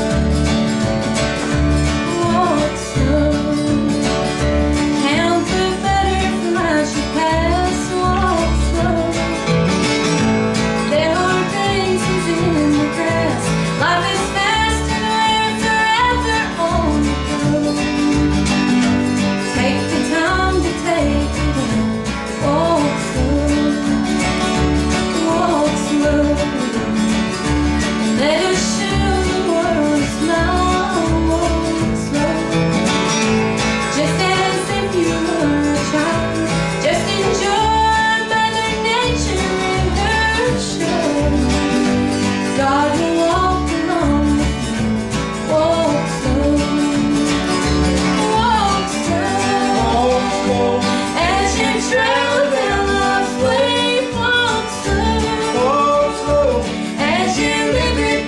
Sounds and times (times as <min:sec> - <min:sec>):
Music: 0:00.0 - 0:58.2.